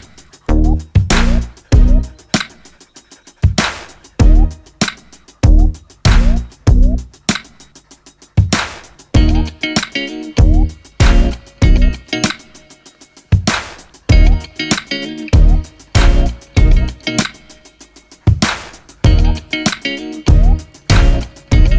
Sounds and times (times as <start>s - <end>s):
Music: 0.0s - 21.7s.